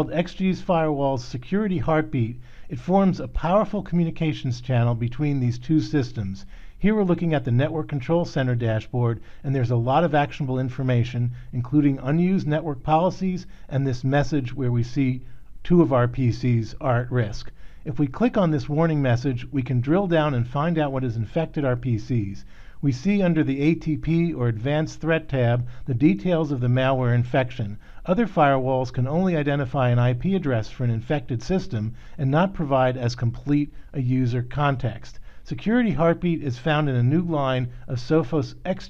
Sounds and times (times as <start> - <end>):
Speech: 0.0 - 38.8.